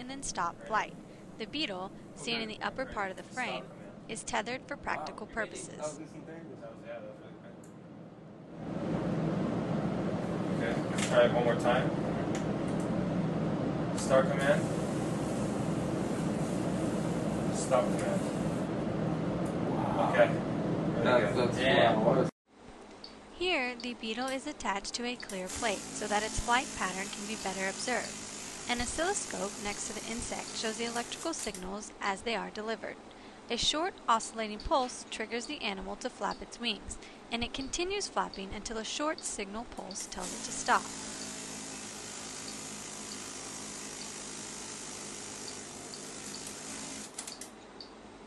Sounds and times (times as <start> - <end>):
Fly, housefly: 40.8 - 47.0.